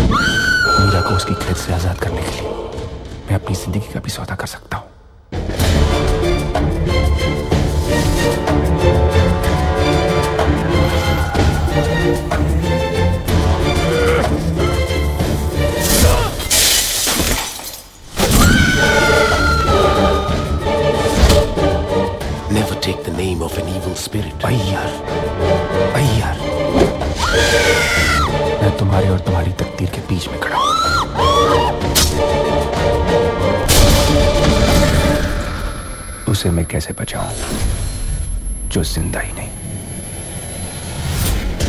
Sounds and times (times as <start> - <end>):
Music: 0.0 - 17.3, 17.9 - 41.6
Speech: 0.8 - 2.4, 3.3 - 4.9, 22.5 - 25.0, 28.6 - 30.6, 36.3 - 37.4, 38.7 - 39.6.